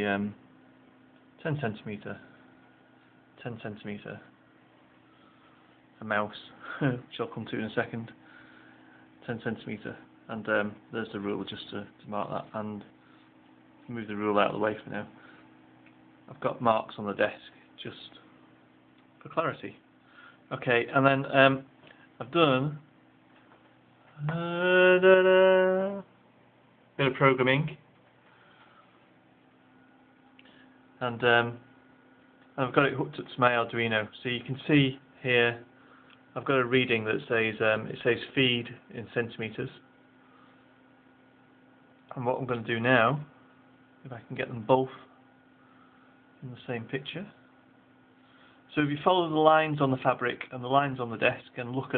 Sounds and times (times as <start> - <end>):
Speech: 0.0 - 0.4, 1.4 - 2.4, 3.4 - 4.4, 6.0 - 8.2, 9.2 - 13.0, 13.8 - 15.2, 16.3 - 18.3, 19.2 - 19.9, 20.5 - 22.9, 27.0 - 27.8, 31.0 - 31.7, 32.6 - 35.7, 36.4 - 39.9, 42.1 - 43.4, 44.0 - 45.1, 46.4 - 47.4, 48.7 - 51.9.